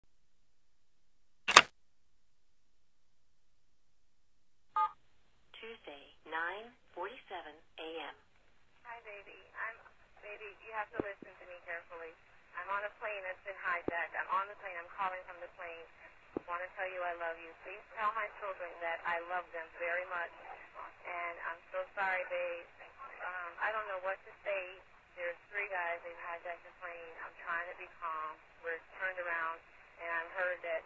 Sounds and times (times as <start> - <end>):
Speech: 5.6 - 8.2, 8.8 - 30.8.